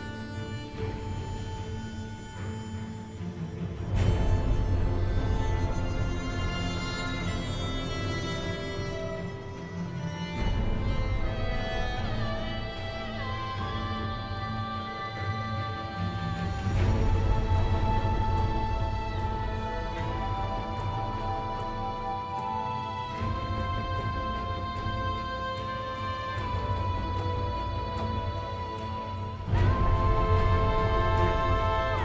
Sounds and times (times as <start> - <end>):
Background music: 0.0 - 32.0.